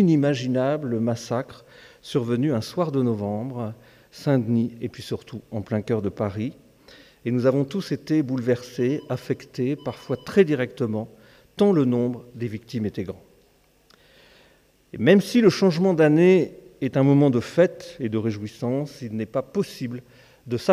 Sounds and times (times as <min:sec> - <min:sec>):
Speech: 0:00.0 - 0:06.6, 0:07.3 - 0:13.3, 0:14.9 - 0:20.7.